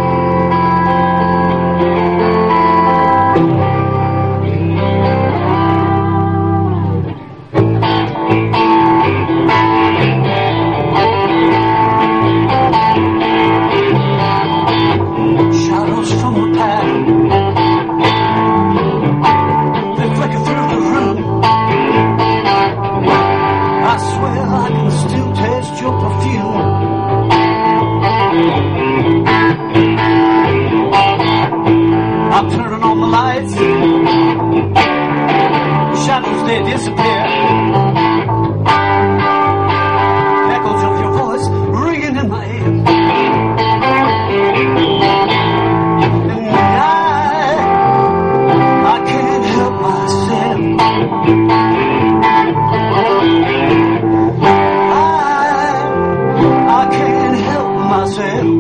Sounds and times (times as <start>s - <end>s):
Guitar: 0.0s - 58.6s.